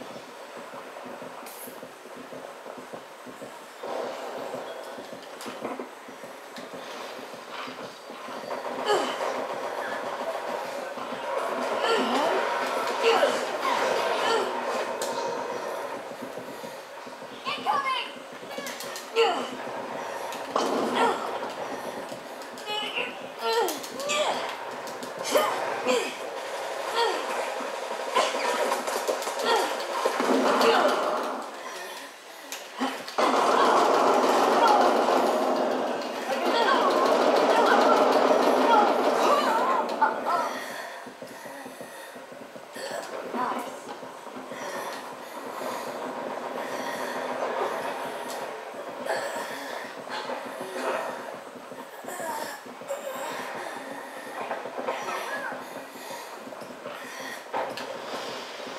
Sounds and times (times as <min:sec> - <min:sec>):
Outside, urban or manmade: 0:00.0 - 0:58.7.